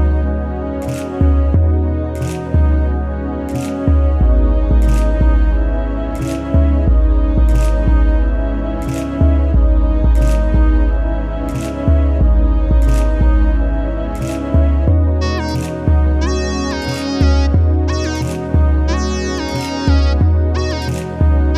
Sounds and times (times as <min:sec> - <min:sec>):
Music: 0:00.0 - 0:21.5.